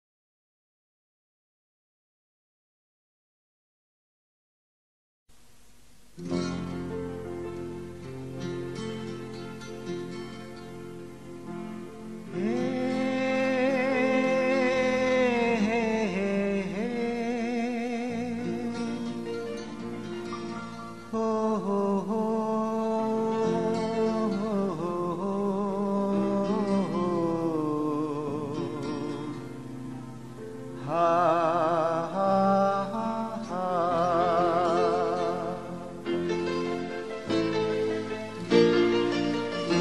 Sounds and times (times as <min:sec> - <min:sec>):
Silence: 0:05.3 - 0:06.7
Music: 0:06.2 - 0:39.8.